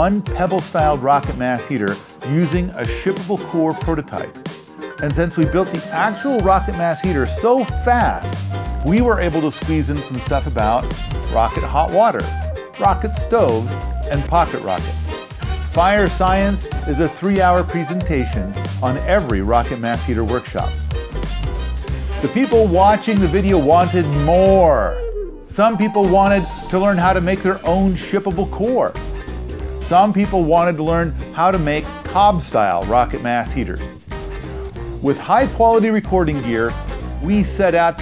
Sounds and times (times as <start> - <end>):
Speech: 0.0 - 4.4, 5.0 - 15.2, 15.8 - 20.8, 22.2 - 29.0, 29.8 - 33.9, 35.0 - 38.0
Music: 0.0 - 38.0.